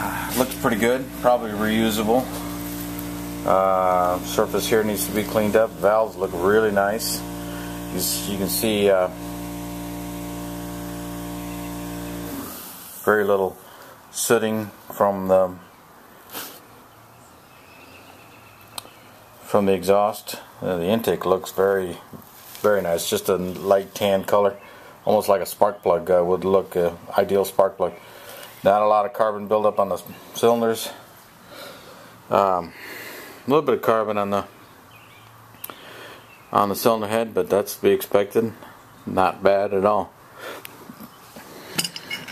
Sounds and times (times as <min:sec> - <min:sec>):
Speech: 0:00.0 - 0:02.4, 0:03.4 - 0:07.2, 0:07.9 - 0:09.2, 0:13.0 - 0:15.7, 0:19.4 - 0:28.0, 0:28.6 - 0:31.1, 0:32.3 - 0:32.8, 0:33.5 - 0:34.6, 0:36.5 - 0:40.2
Engine: 0:00.0 - 0:13.1.